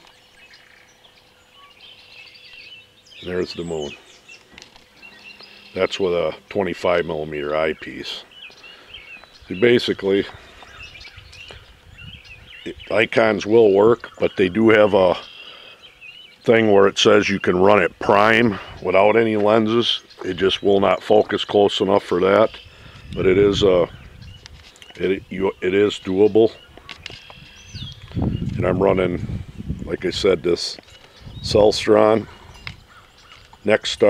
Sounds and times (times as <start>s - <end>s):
Environmental noise: 0.0s - 34.0s
Speech: 3.2s - 4.0s, 5.8s - 8.3s, 9.5s - 10.4s, 12.7s - 15.2s, 16.4s - 22.6s, 23.2s - 24.0s, 25.0s - 26.6s, 28.5s - 30.8s, 31.4s - 32.3s, 33.6s - 34.0s.